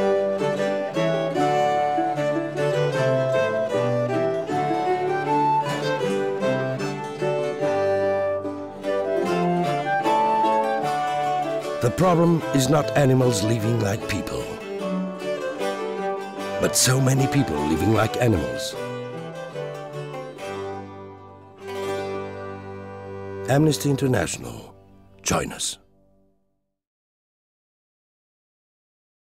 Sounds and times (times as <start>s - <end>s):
Music: 0.0s - 26.8s
Speech: 11.8s - 14.6s, 16.6s - 18.8s, 23.5s - 25.8s.